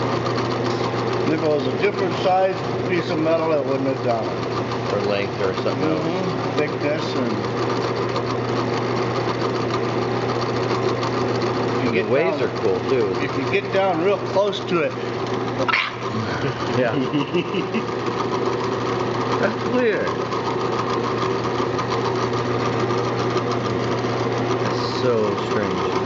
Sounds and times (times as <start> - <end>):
Speech: 11.8 - 15.0, 24.7 - 26.0.